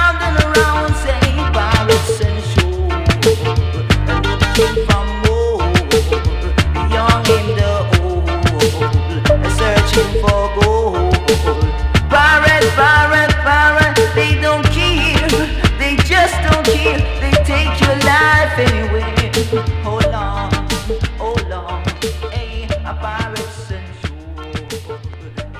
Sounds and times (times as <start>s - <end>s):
Music of Bollywood: 0.0s - 25.5s
Reggae: 0.0s - 25.5s.